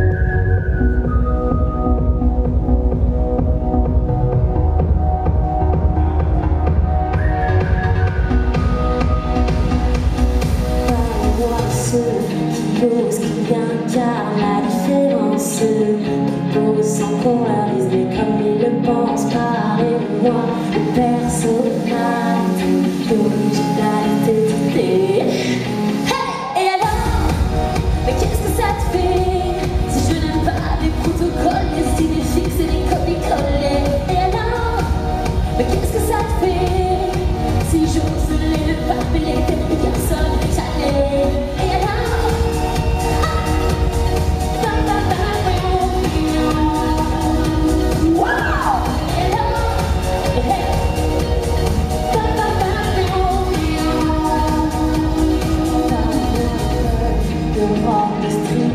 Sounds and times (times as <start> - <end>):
Rhythm and blues: 0.0 - 58.7.